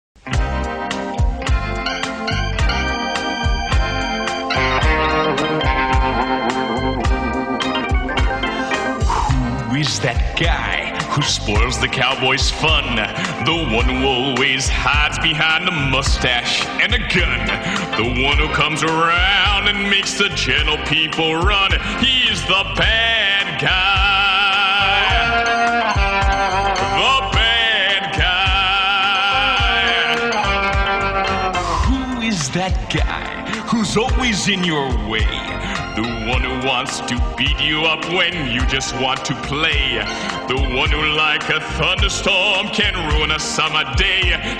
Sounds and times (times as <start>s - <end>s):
Music: 0.2s - 44.5s
Speech: 9.3s - 22.9s, 31.8s - 44.4s.